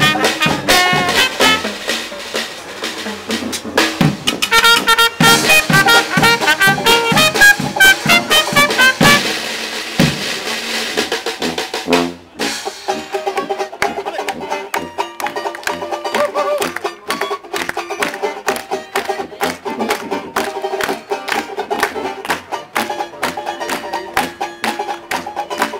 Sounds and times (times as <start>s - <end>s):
Blues: 0.0s - 25.8s
Rhythm and blues: 0.0s - 25.8s
Speech: 13.8s - 14.9s.